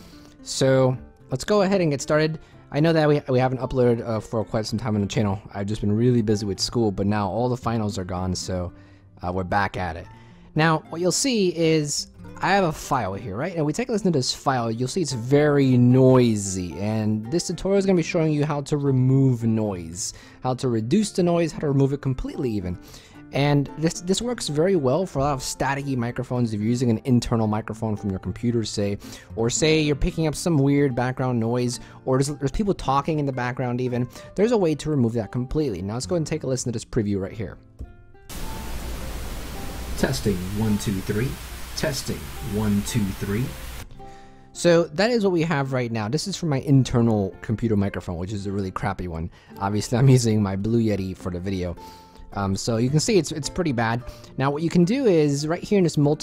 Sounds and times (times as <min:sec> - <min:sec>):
Music: 0:00.0 - 0:56.2
Speech: 0:00.5 - 0:22.8, 0:23.4 - 0:37.6, 0:40.0 - 0:43.6, 0:44.6 - 0:51.8, 0:52.4 - 0:56.2.